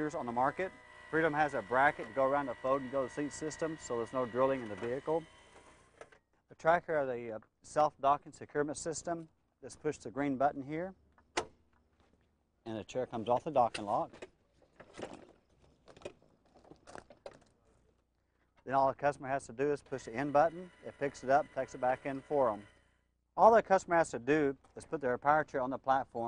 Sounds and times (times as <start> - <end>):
Speech: 0.0 - 5.3, 6.5 - 11.0, 12.6 - 14.2, 18.7 - 22.7, 23.4 - 26.2.